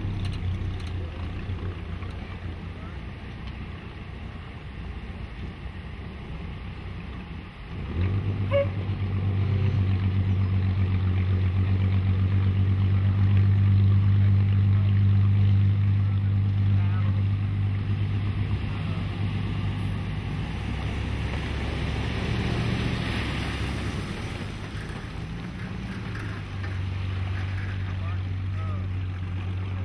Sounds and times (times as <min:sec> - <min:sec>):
Speech: 0:00.8 - 0:03.3, 0:14.6 - 0:17.5, 0:27.8 - 0:29.0.